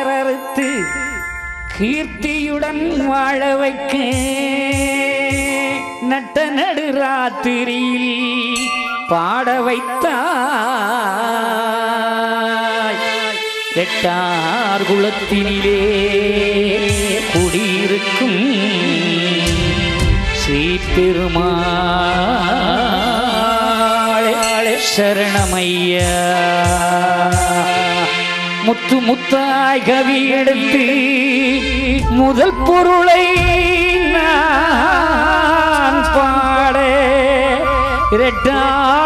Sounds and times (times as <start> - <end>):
Music: 0.0 - 39.0.